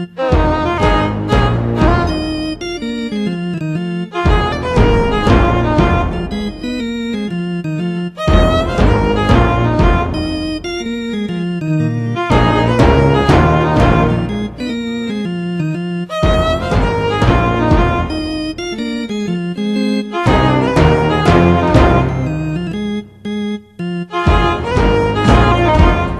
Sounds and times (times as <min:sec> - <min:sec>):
Blues: 0:00.0 - 0:26.1.